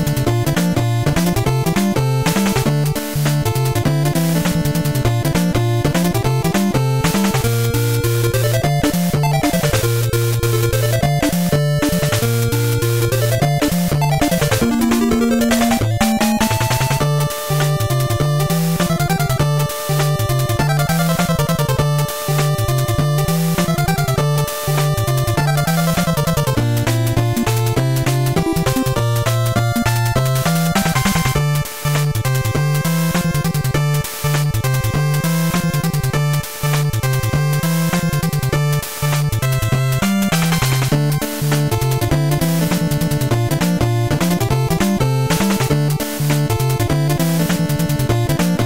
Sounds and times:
Music: 0:00.0 - 0:48.6.

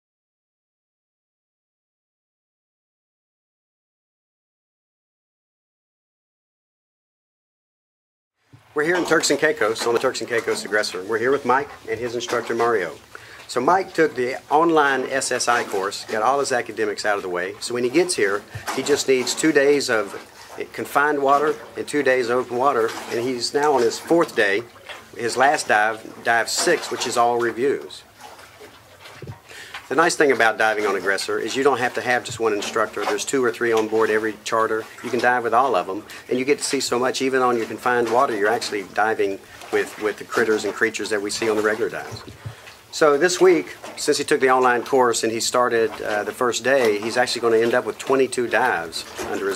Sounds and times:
Speech: 0:08.8 - 0:28.1, 0:29.9 - 0:42.3, 0:42.9 - 0:49.5.

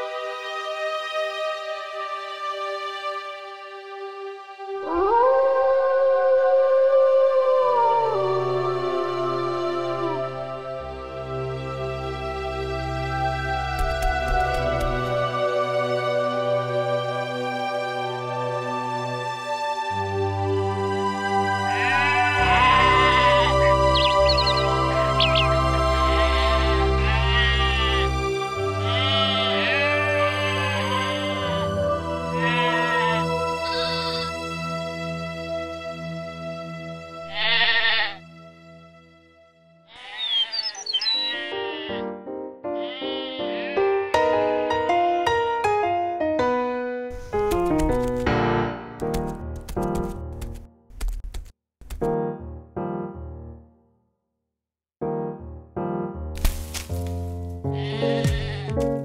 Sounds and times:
Music: 0:00.0 - 0:50.9, 0:51.9 - 0:54.3, 0:55.0 - 0:59.0
Bleat: 0:21.6 - 0:24.6, 0:26.1 - 0:34.4, 0:37.3 - 0:38.3, 0:39.9 - 0:42.1, 0:42.7 - 0:44.7, 0:57.7 - 0:58.9.

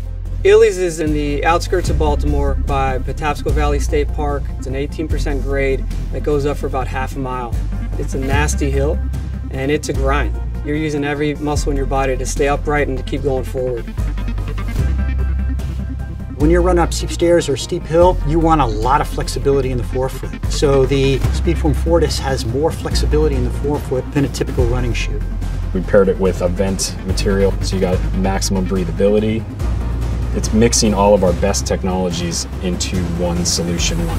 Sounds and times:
Music: 0:00.0 - 0:34.1
Speech: 0:00.4 - 0:13.9, 0:16.4 - 0:25.2, 0:25.8 - 0:29.4, 0:30.4 - 0:34.1.

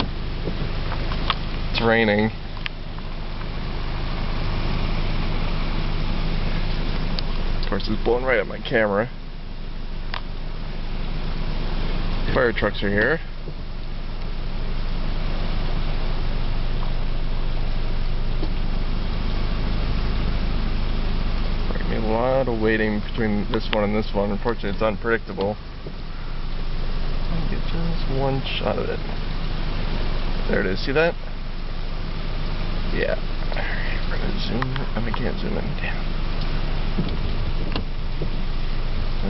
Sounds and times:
Speech: 0:01.7 - 0:02.4, 0:07.6 - 0:09.2, 0:12.3 - 0:13.3, 0:21.7 - 0:25.6, 0:27.3 - 0:29.0, 0:30.5 - 0:31.2, 0:32.9 - 0:36.1.

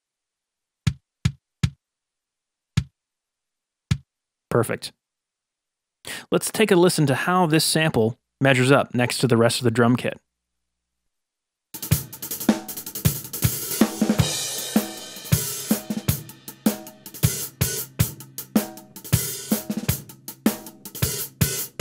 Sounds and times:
Drum kit: 0:11.8 - 0:21.8.

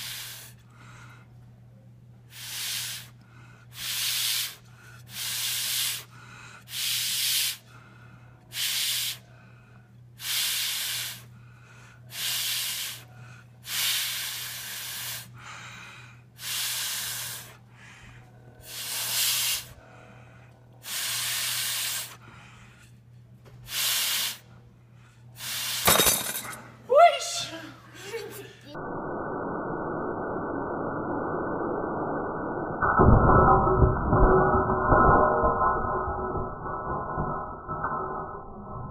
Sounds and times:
Speech: 0:26.9 - 0:28.8.

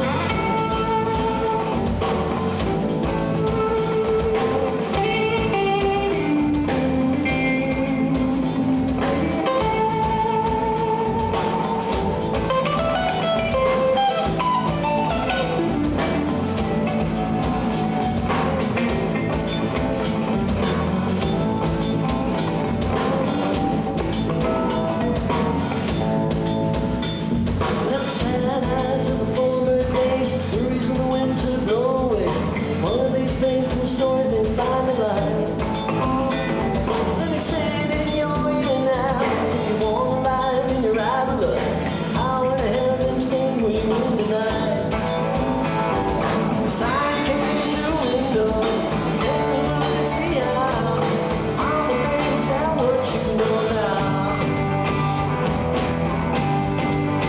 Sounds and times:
Music: 0:00.0 - 0:57.2.

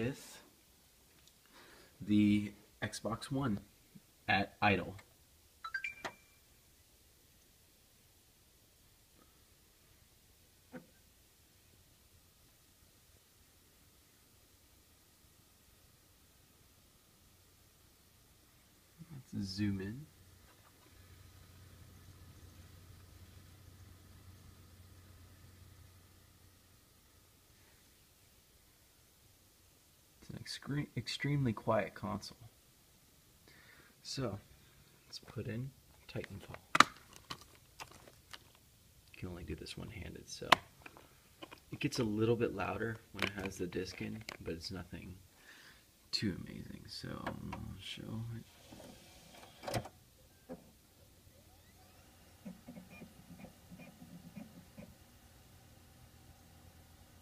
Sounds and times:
Speech: 0:00.0 - 0:00.5, 0:02.0 - 0:03.7, 0:04.3 - 0:05.0, 0:19.0 - 0:20.1, 0:30.2 - 0:32.5, 0:34.0 - 0:34.4, 0:35.1 - 0:36.6, 0:39.1 - 0:40.6, 0:41.7 - 0:45.2, 0:46.1 - 0:48.5.

